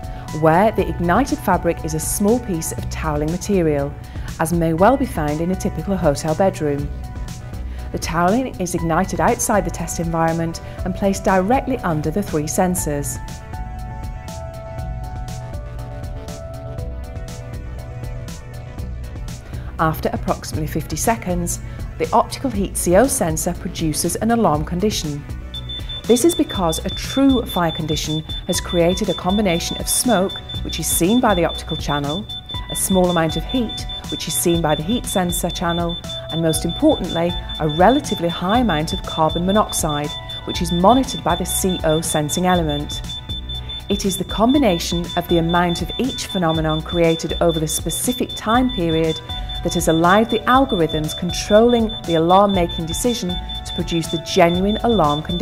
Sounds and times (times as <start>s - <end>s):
Music: 0.0s - 55.4s
Speech: 0.4s - 6.9s, 8.0s - 13.2s, 19.8s - 25.2s, 26.1s - 43.0s, 43.9s - 55.4s.